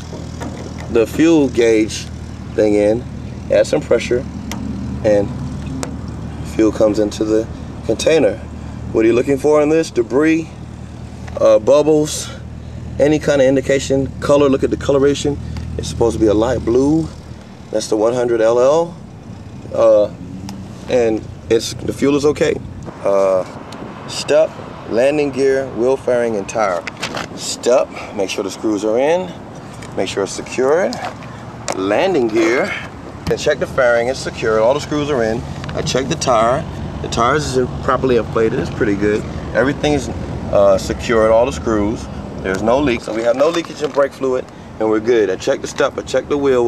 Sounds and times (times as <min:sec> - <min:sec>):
Speech: 0:00.9 - 0:04.3, 0:05.1 - 0:05.3, 0:06.5 - 0:10.5, 0:11.4 - 0:12.4, 0:13.0 - 0:19.0, 0:20.9 - 0:23.5, 0:24.1 - 0:26.8, 0:27.4 - 0:29.4, 0:30.0 - 0:31.1, 0:31.7 - 0:46.6.